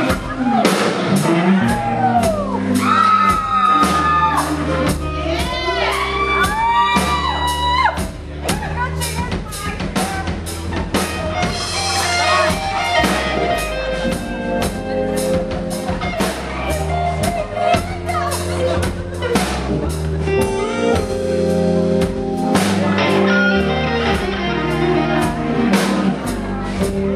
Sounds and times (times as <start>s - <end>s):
Music: 0.0s - 27.1s
Speech: 7.0s - 13.6s, 14.7s - 21.0s, 22.6s - 27.1s.